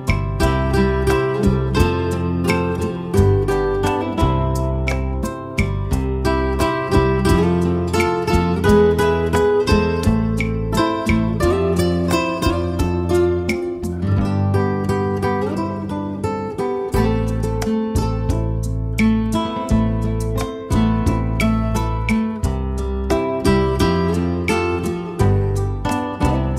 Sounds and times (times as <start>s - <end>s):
Strum: 0.0s - 26.5s.